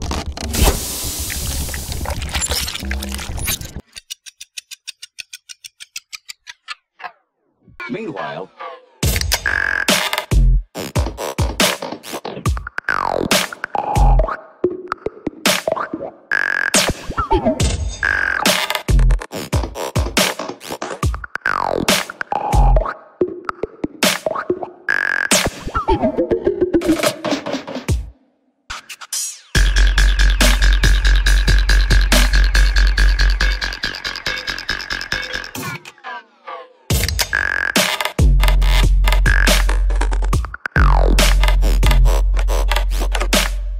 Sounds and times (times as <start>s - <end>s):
Electronica: 28.7s - 43.5s.